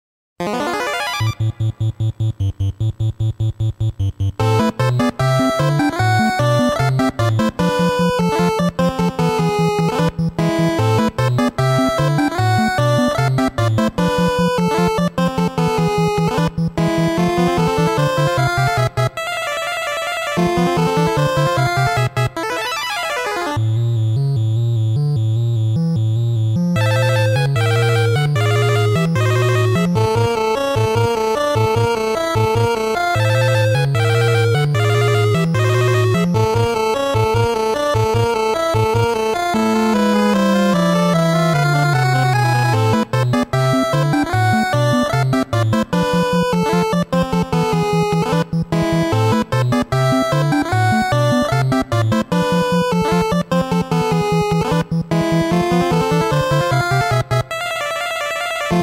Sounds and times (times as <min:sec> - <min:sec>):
Background music: 0:00.4 - 0:58.8.